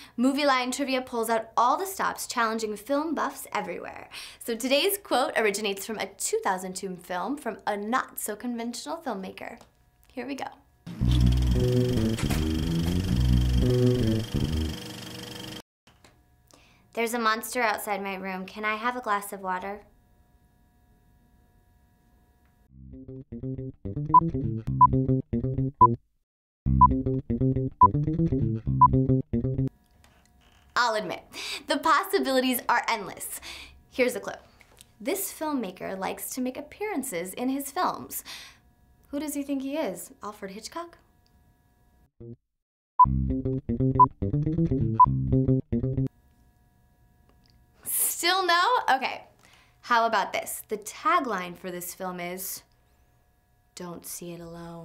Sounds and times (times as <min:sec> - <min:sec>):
Speech: 0:00.2 - 0:10.6, 0:17.0 - 0:19.9, 0:30.8 - 0:33.4, 0:34.0 - 0:34.4, 0:35.0 - 0:38.3, 0:39.1 - 0:41.0, 0:47.9 - 0:52.7, 0:53.8 - 0:54.8
Music: 0:10.9 - 0:15.3, 0:22.7 - 0:26.0, 0:26.7 - 0:29.7, 0:43.0 - 0:46.1.